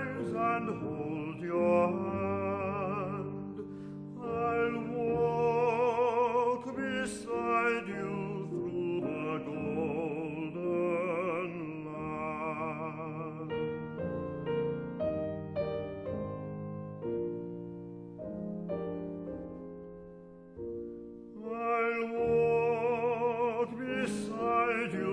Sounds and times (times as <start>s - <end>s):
Music: 0.0s - 25.1s.